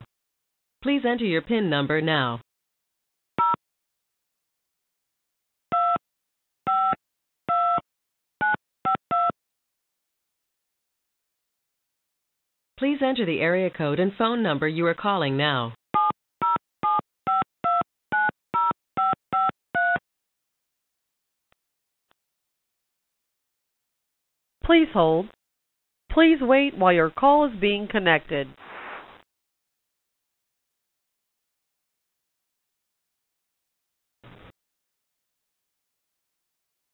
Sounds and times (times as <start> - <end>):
Speech: 0.8 - 2.4, 12.8 - 15.8, 24.6 - 25.3, 26.1 - 28.6.